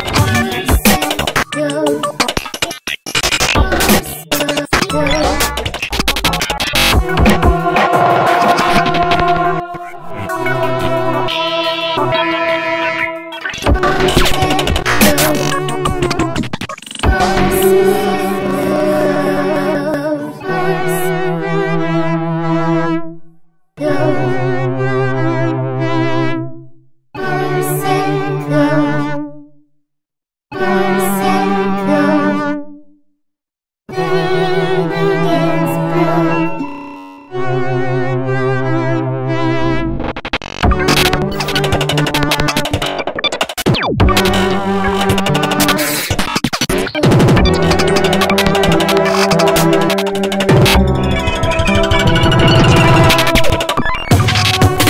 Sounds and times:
Music: 0.0s - 29.7s, 30.5s - 33.1s, 33.9s - 54.8s.

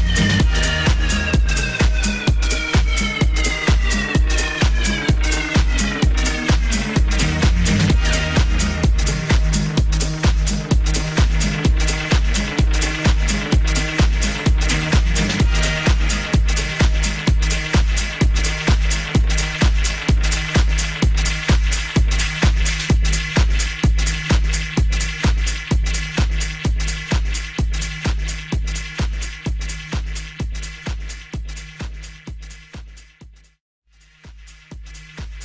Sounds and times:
House music: 0.0s - 35.4s.

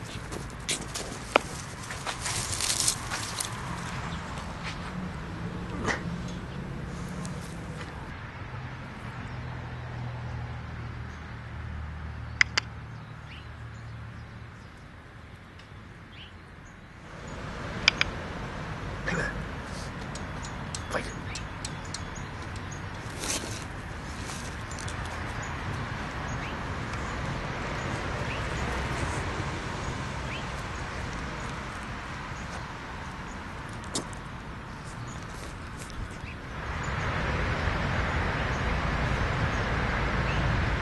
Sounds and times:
Outside, rural or natural: 0.0s - 40.8s
Speech: 19.1s - 19.4s, 20.8s - 21.4s.

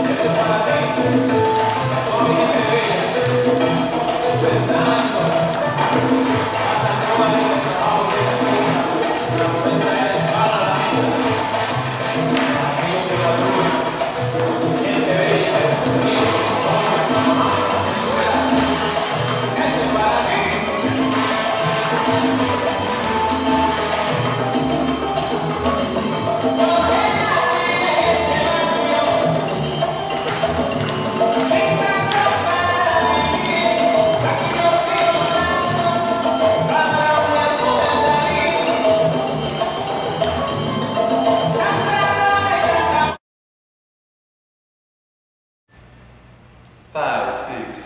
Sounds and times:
Music: 0.0s - 43.2s.

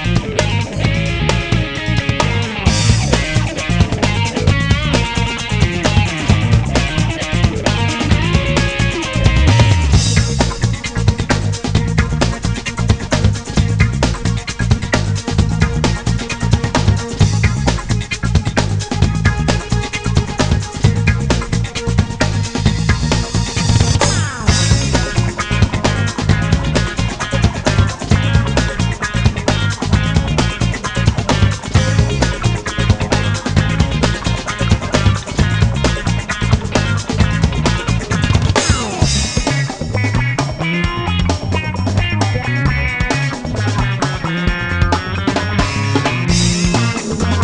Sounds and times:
Music: 0.0s - 47.4s.

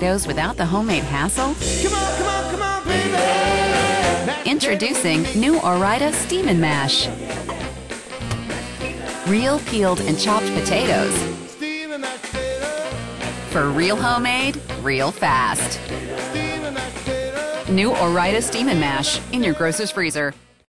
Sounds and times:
Speech: 0.0s - 1.6s, 4.5s - 7.1s, 9.3s - 11.2s, 13.6s - 15.8s, 17.7s - 20.4s
Music: 0.0s - 20.7s.

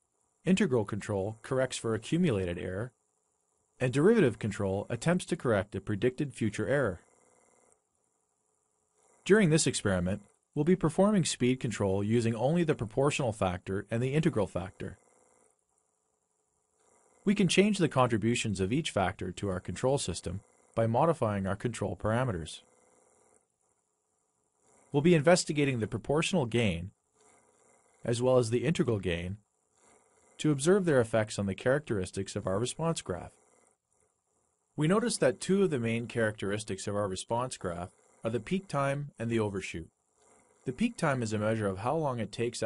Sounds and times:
Speech: 0.5s - 2.9s, 3.8s - 7.0s, 9.3s - 15.0s, 17.3s - 22.6s, 25.0s - 26.9s, 28.1s - 29.4s, 30.4s - 33.3s, 34.8s - 39.9s, 40.7s - 42.6s.

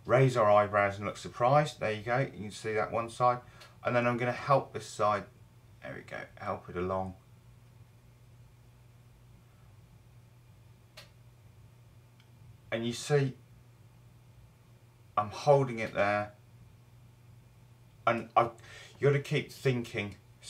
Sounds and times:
Speech: 0.0s - 7.2s, 12.7s - 13.4s, 15.2s - 16.4s, 18.1s - 20.4s.

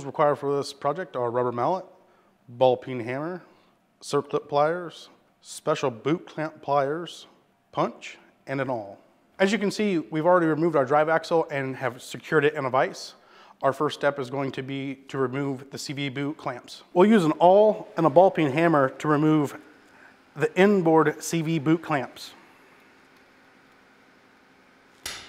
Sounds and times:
Speech: 0.0s - 19.6s, 20.4s - 22.4s.

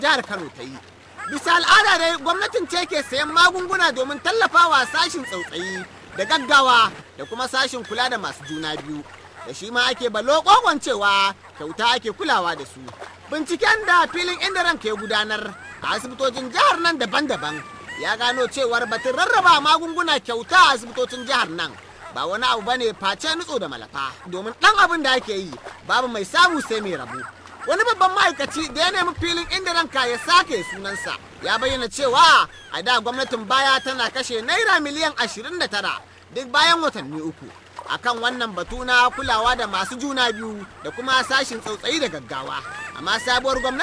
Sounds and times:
Speech: 0.0s - 43.8s.

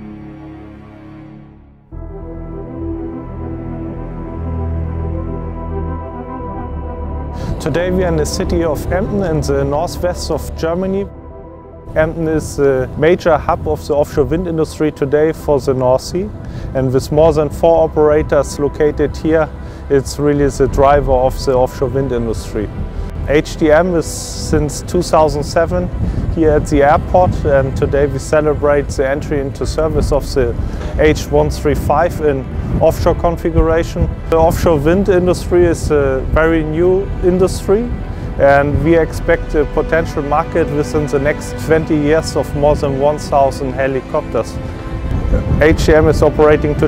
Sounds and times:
Music: 0.0s - 46.8s
Speech: 7.6s - 11.1s, 12.0s - 22.7s, 23.3s - 44.6s, 45.5s - 46.8s.

